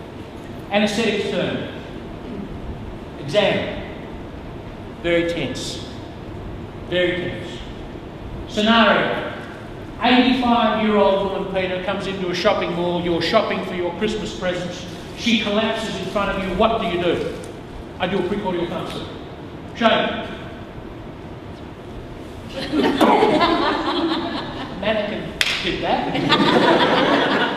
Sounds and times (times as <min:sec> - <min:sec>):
Speech: 0:00.7 - 0:01.8, 0:03.2 - 0:03.9, 0:05.0 - 0:05.9, 0:06.9 - 0:07.7, 0:08.5 - 0:09.4, 0:10.0 - 0:17.4, 0:18.0 - 0:19.2, 0:19.8 - 0:20.4, 0:24.8 - 0:26.2.